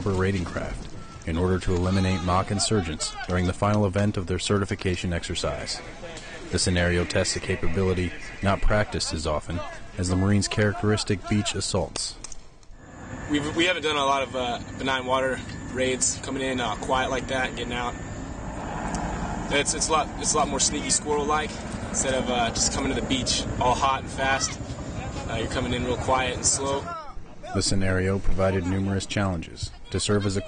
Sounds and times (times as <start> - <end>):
Speech: 0.0 - 12.2, 13.3 - 18.0, 19.5 - 30.4.